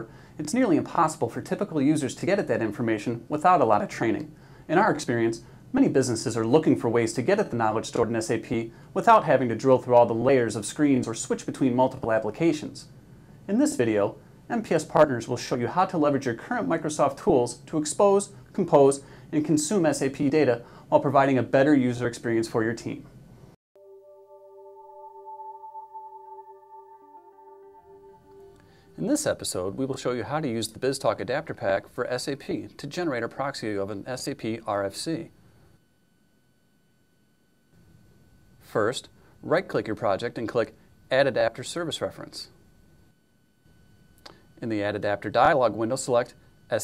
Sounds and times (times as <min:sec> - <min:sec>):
Speech: 0:00.0 - 0:23.2, 0:29.0 - 0:35.4, 0:38.6 - 0:42.6, 0:44.6 - 0:46.8.